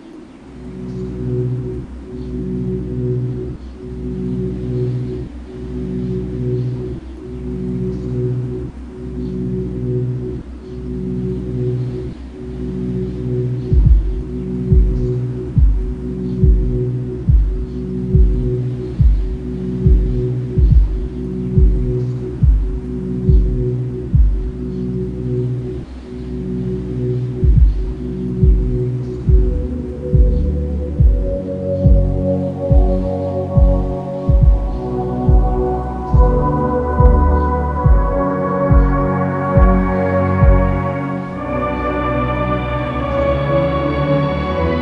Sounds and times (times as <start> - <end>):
Dubstep: 0.0 - 44.8.